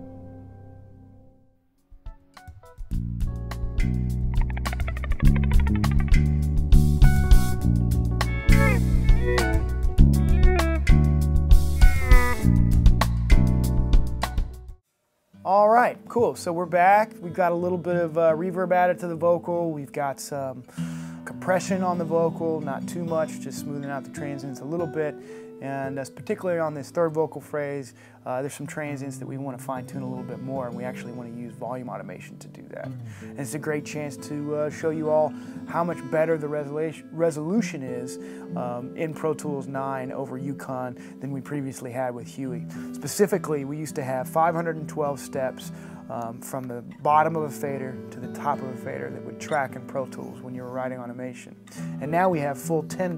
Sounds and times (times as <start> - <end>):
Music: 0.0 - 53.1
Speech: 15.4 - 20.7, 21.3 - 53.1.